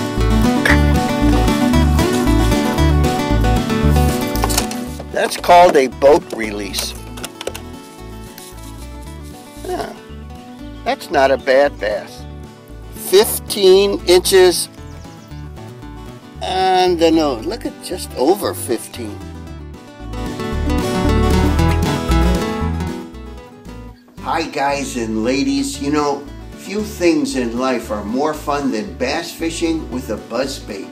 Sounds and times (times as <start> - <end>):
Music: 0.0 - 30.9
Speech: 5.1 - 7.0, 9.6 - 10.0, 10.9 - 12.2, 13.0 - 14.7, 16.4 - 19.2, 24.2 - 30.9.